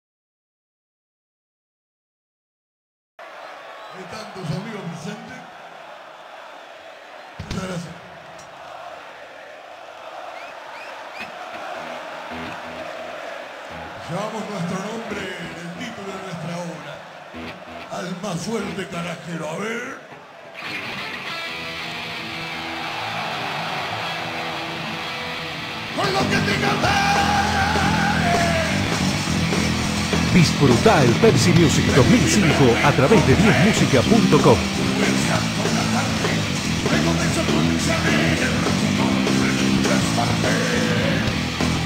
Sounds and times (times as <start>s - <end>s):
Speech: 4.0s - 5.5s, 7.5s - 8.0s, 14.0s - 17.0s, 17.9s - 20.0s, 30.3s - 34.6s
Music: 11.4s - 15.9s, 17.3s - 19.0s, 20.5s - 41.8s.